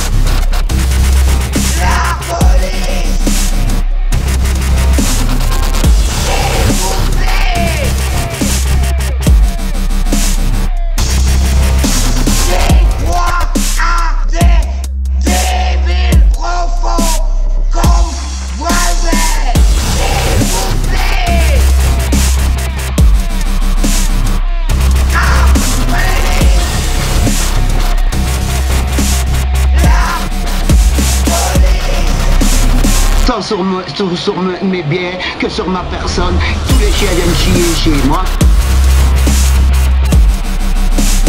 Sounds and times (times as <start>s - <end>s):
Dubstep: 0.0s - 41.2s.